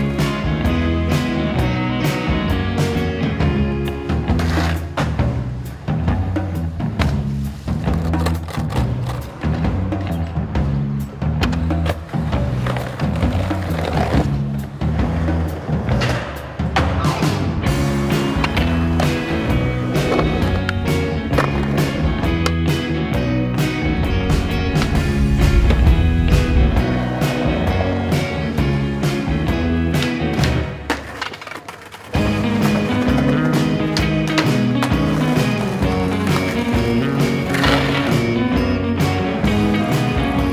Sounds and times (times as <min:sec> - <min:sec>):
Skateboard: 0:00.0 - 0:22.9, 0:23.5 - 0:40.5
Music: 0:00.0 - 0:40.5.